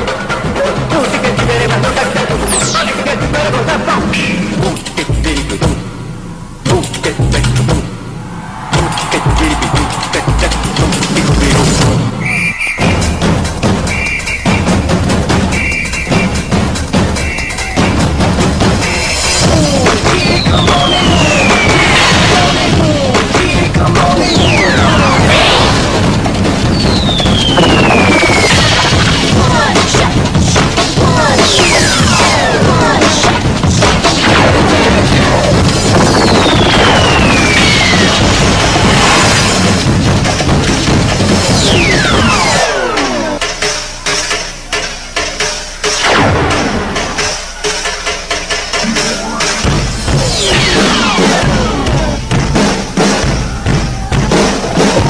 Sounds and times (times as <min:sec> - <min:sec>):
Music: 0:00.0 - 0:55.1.